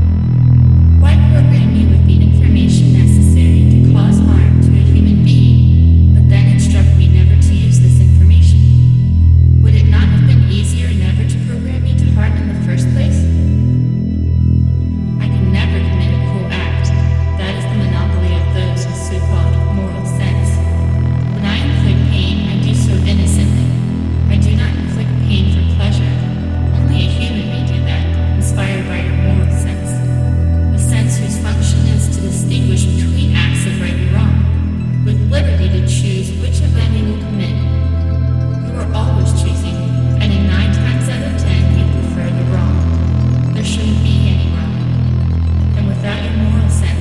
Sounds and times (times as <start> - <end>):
Music: 0.0 - 47.0
Speech: 1.0 - 8.8, 9.6 - 13.4, 15.2 - 20.7, 21.4 - 30.1, 30.7 - 37.8, 38.6 - 42.9, 43.5 - 45.0, 45.7 - 47.0.